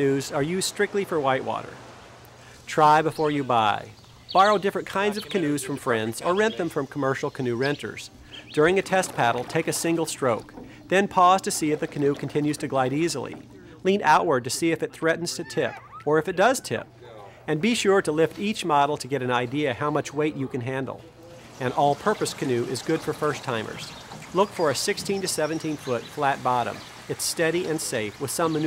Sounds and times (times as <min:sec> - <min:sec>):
Rowboat, canoe, kayak: 0:00.0 - 0:28.6.